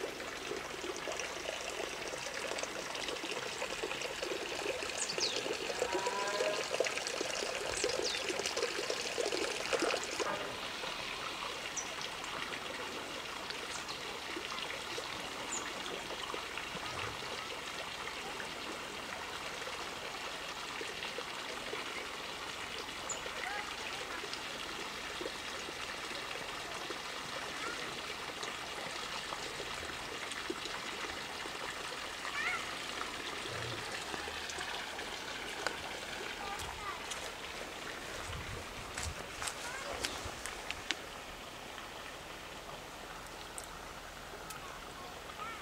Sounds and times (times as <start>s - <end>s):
Pour: 0.0s - 45.6s
Stream: 0.0s - 45.6s.